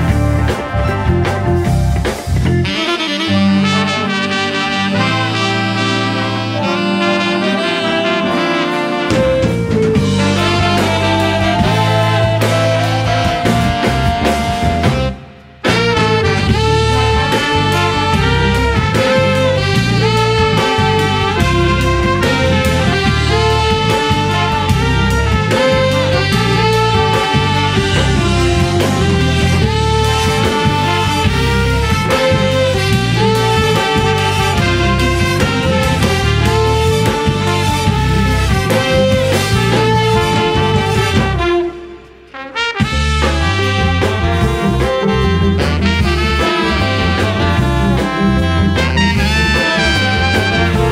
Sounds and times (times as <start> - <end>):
Trombone: 0.0 - 50.9
Trumpet: 0.0 - 50.9.